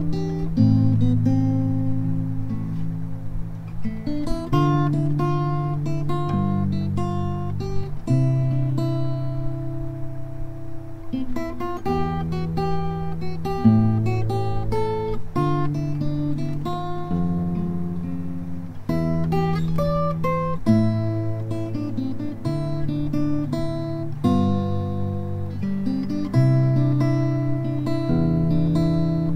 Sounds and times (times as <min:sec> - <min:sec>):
Electric guitar: 0:00.0 - 0:29.3.